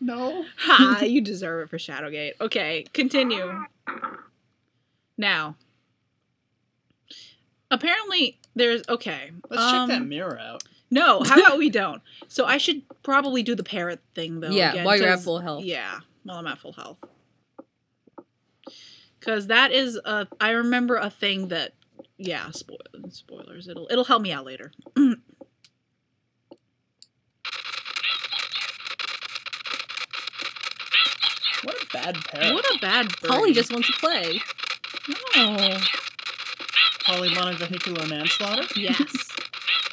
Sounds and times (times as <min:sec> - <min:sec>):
Speech: 0:00.0 - 0:03.7, 0:05.2 - 0:05.6, 0:07.1 - 0:17.0, 0:18.7 - 0:25.2, 0:31.6 - 0:34.4, 0:35.1 - 0:36.0, 0:37.1 - 0:39.3.